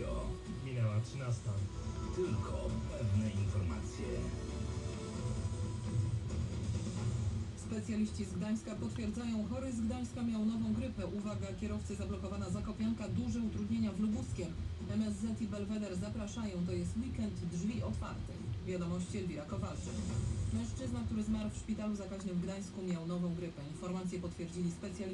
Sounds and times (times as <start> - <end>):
Speech: 0.0 - 4.3, 7.6 - 19.9, 20.6 - 25.1.